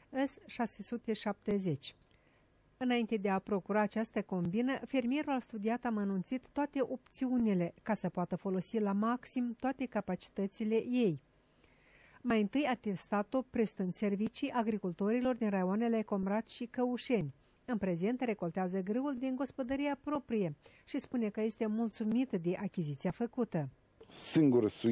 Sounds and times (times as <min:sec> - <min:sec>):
Speech: 0:12.3 - 0:24.9.